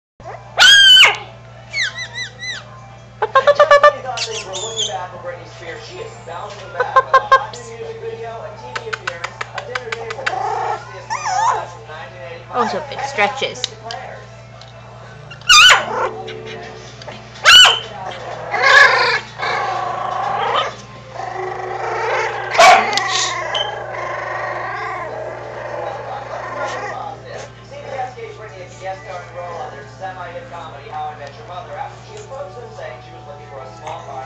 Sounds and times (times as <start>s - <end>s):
Music: 0.2s - 34.2s
Speech: 3.6s - 14.3s, 25.7s - 34.2s.